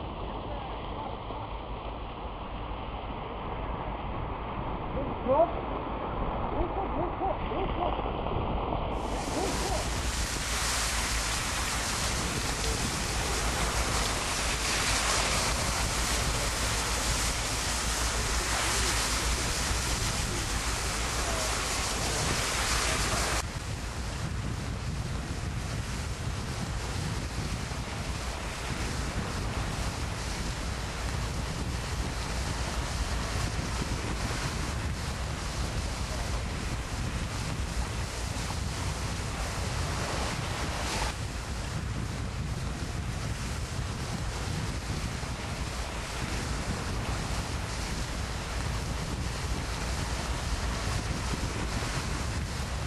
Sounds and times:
Wind noise (microphone): 0:00.0 - 0:52.8.

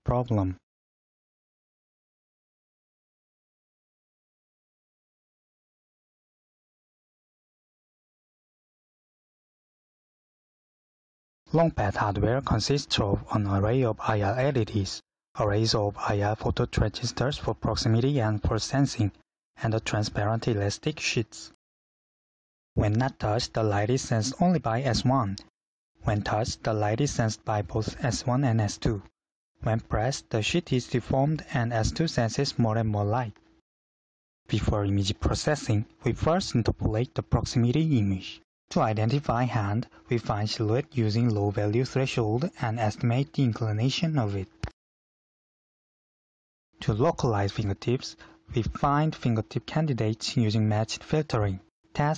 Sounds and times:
Speech: 0:00.0 - 0:00.6, 0:11.5 - 0:21.6, 0:22.8 - 0:33.4, 0:34.5 - 0:44.7, 0:46.8 - 0:52.1.

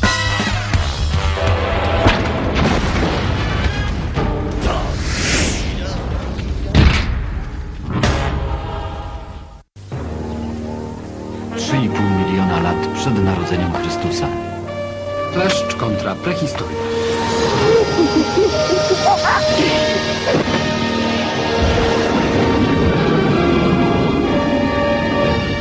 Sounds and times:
Music: 0:00.0 - 0:05.1, 0:05.8 - 0:25.6
Speech: 0:11.6 - 0:14.4, 0:15.3 - 0:16.7.

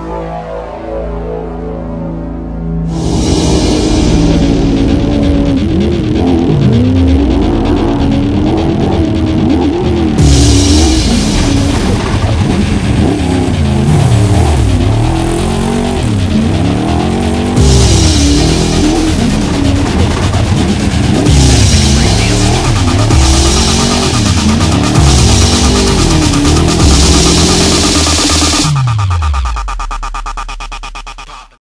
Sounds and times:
Music: 0:00.0 - 0:31.6
Car: 0:02.9 - 0:31.4.

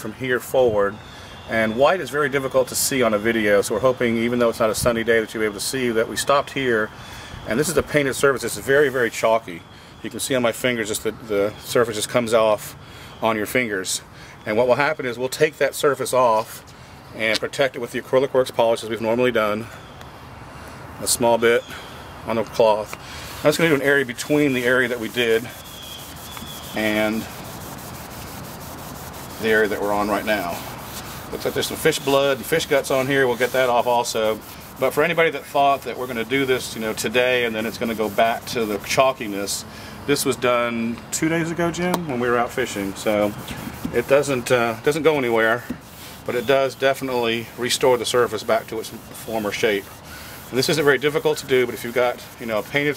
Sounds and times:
Speech: 0:00.0 - 0:06.9, 0:07.5 - 0:16.6, 0:17.2 - 0:19.7, 0:21.0 - 0:21.7, 0:22.3 - 0:25.6, 0:26.8 - 0:27.3, 0:29.4 - 0:30.6, 0:31.3 - 0:45.7, 0:46.3 - 0:49.9, 0:50.5 - 0:52.9.

